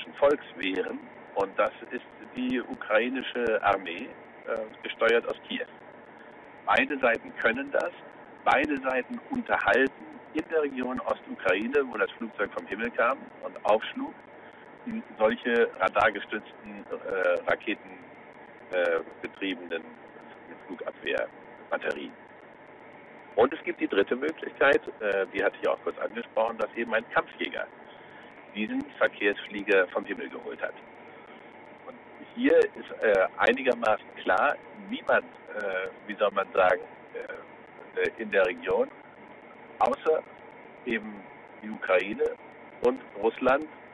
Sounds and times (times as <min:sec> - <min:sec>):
Speech: 0:00.0 - 0:05.7, 0:06.7 - 0:14.2, 0:14.9 - 0:18.0, 0:18.7 - 0:22.2, 0:23.4 - 0:27.7, 0:28.6 - 0:30.8, 0:31.9 - 0:38.9, 0:39.8 - 0:40.3, 0:40.9 - 0:43.7
Radio: 0:00.0 - 0:43.9.